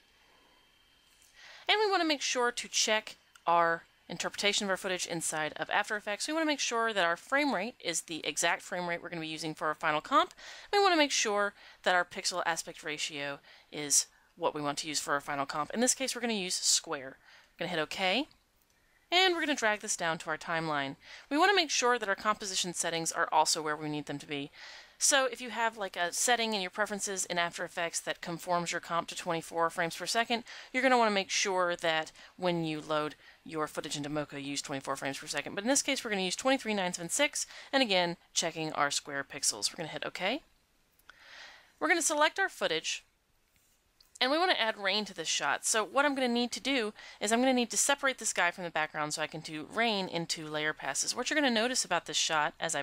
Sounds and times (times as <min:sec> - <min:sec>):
Speech: 0:01.7 - 0:18.3, 0:19.2 - 0:40.5, 0:41.8 - 0:43.1, 0:44.2 - 0:52.8.